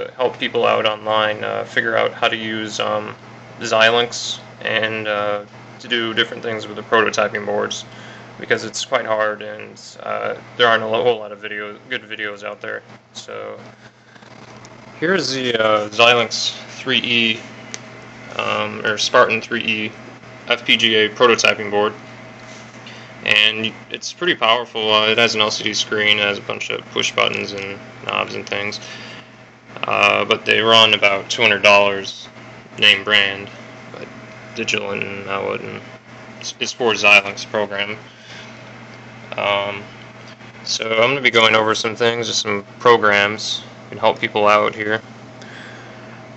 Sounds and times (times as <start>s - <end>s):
Speech: 0.0s - 13.7s, 15.0s - 17.5s, 18.3s - 22.0s, 23.2s - 29.0s, 29.7s - 38.0s, 39.3s - 40.0s, 40.6s - 45.0s.